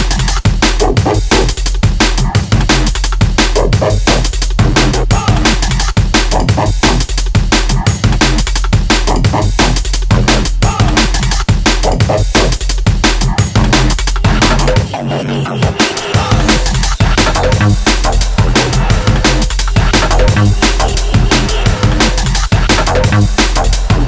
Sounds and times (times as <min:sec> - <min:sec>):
Drum and bass: 0:00.0 - 0:24.0.